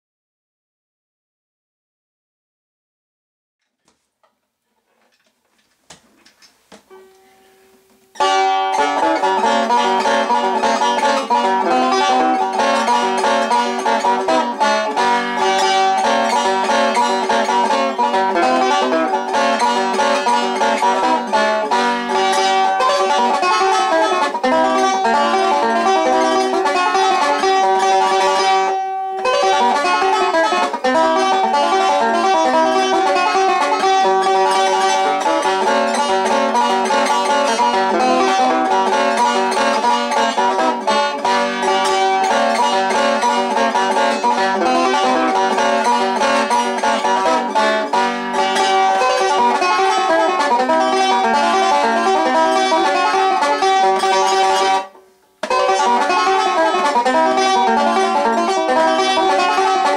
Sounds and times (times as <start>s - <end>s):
Bluegrass: 3.7s - 59.9s
Banjo: 4.7s - 59.9s
Bowed string instrument: 6.8s - 59.9s.